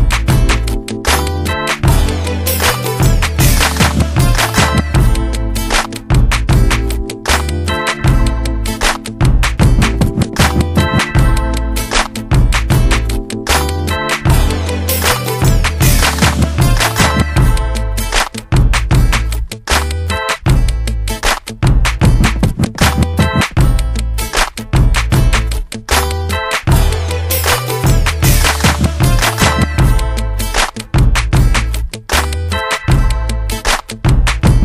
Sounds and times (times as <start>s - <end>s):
Music: 0.0s - 34.6s.